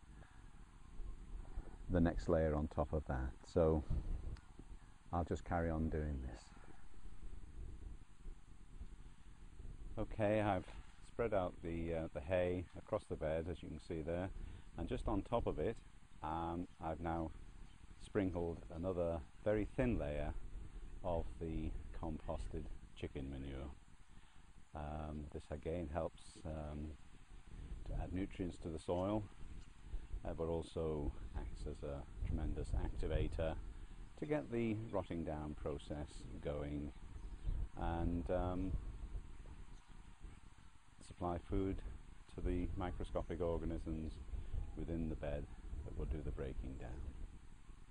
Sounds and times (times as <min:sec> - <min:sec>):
Speech: 0:01.9 - 0:04.0, 0:05.1 - 0:06.7, 0:10.0 - 0:17.4, 0:18.0 - 0:20.4, 0:21.0 - 0:23.8, 0:24.8 - 0:27.0, 0:27.8 - 0:29.3, 0:30.2 - 0:33.6, 0:34.2 - 0:37.0, 0:37.8 - 0:38.8, 0:41.0 - 0:44.2, 0:44.8 - 0:47.1.